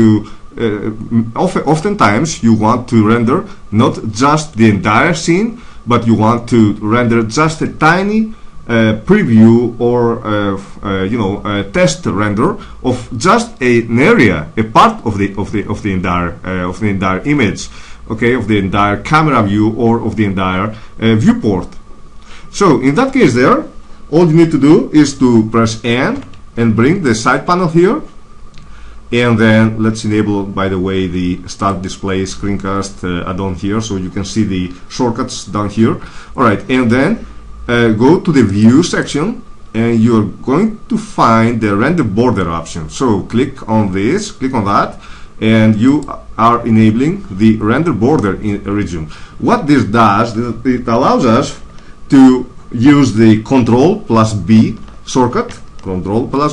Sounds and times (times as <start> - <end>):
Speech: 0.0 - 21.8, 22.5 - 28.2, 29.1 - 56.5.